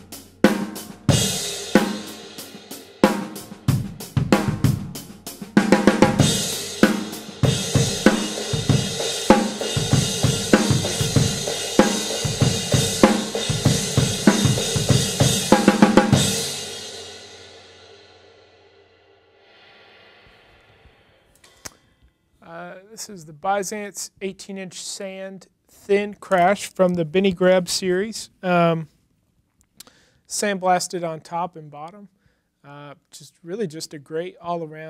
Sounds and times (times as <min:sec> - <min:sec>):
Drum kit: 0:00.0 - 0:18.2
Bass drum: 0:03.4 - 0:16.6.